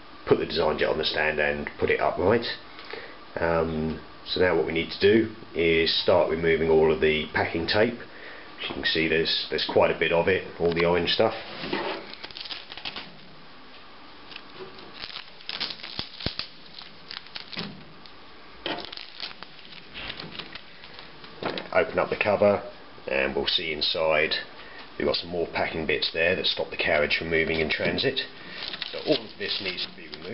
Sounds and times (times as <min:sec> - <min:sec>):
Speech: 0:00.2 - 0:02.6, 0:03.4 - 0:11.4, 0:21.7 - 0:30.3.